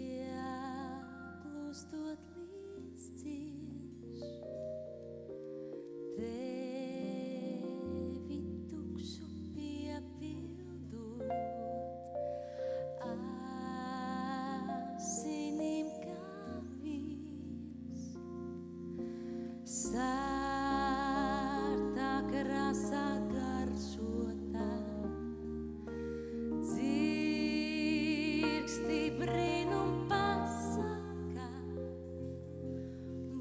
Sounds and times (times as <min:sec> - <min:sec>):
Music: 0:00.0 - 0:33.4.